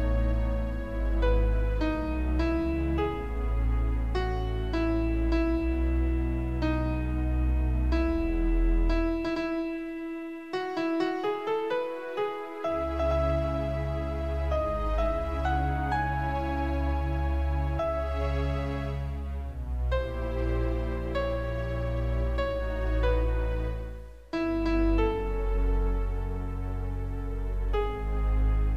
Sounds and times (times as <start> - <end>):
Sad music: 0.0 - 28.7.